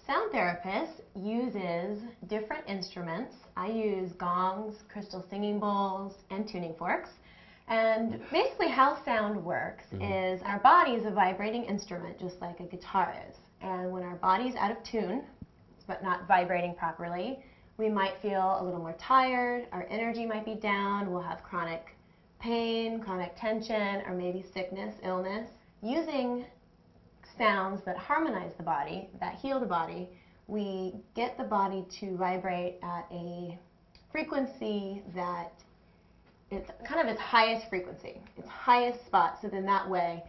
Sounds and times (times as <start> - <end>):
Speech: 0.0 - 26.6, 27.3 - 35.6, 36.5 - 40.2.